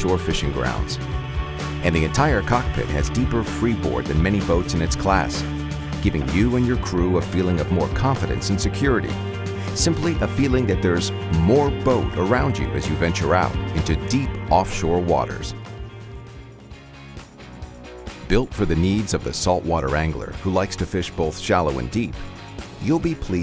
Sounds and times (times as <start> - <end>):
Speech: 0.0 - 1.0, 1.8 - 9.2, 9.8 - 15.6, 18.3 - 22.2, 22.8 - 23.4
Music: 0.0 - 23.4.